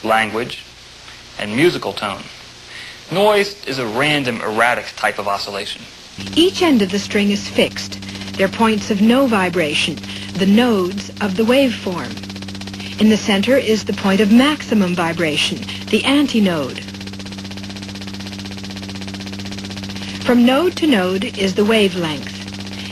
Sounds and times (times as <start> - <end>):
Speech: 0.0 - 0.7, 1.4 - 2.4, 3.1 - 12.2, 12.9 - 16.8, 20.2 - 22.9.